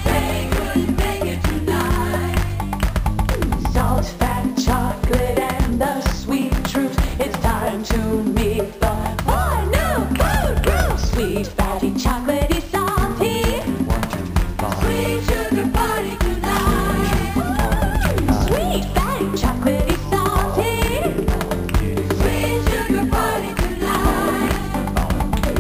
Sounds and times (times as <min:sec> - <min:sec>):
Exciting music: 0:00.0 - 0:25.6.